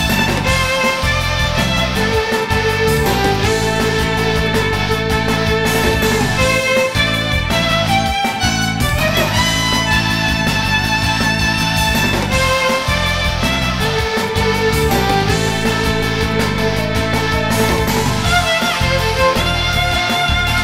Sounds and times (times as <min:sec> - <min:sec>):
Violin, fiddle: 0:00.0 - 0:20.6.